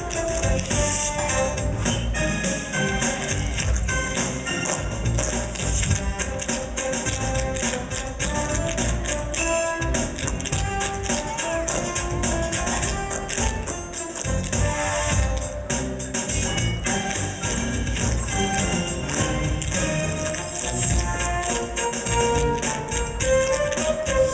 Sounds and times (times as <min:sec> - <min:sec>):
Soundtrack music: 0:00.0 - 0:24.3.